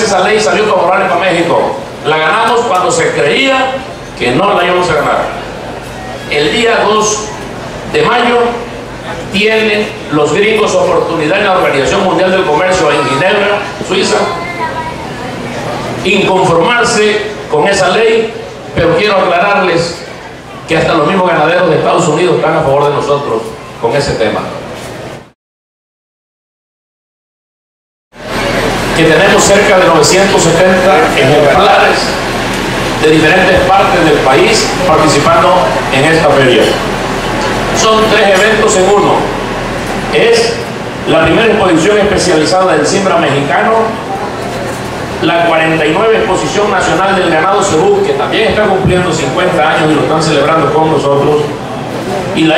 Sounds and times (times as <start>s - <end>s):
Male speech, man speaking: 0.0s - 5.4s, 6.3s - 14.5s, 16.0s - 20.0s, 20.7s - 24.6s, 29.0s - 32.2s, 33.0s - 36.8s, 37.8s - 39.4s, 40.1s - 44.0s, 45.2s - 51.6s, 52.4s - 52.5s.